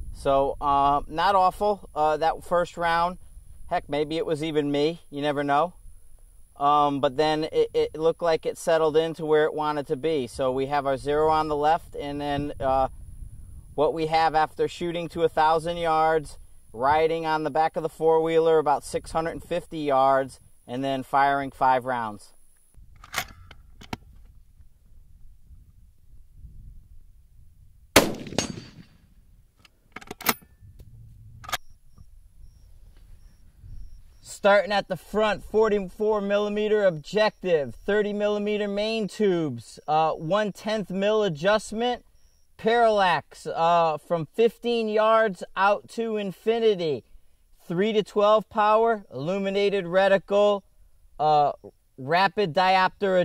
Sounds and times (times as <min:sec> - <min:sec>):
Outside, rural or natural: 0:00.0 - 0:53.2.